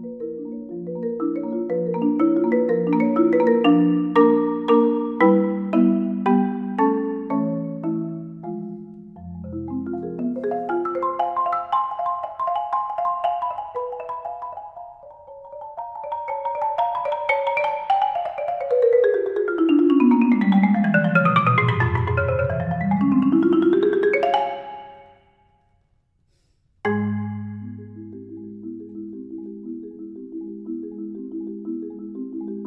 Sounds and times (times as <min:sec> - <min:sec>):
Marimba, xylophone: 0:00.0 - 0:25.3, 0:26.9 - 0:32.6.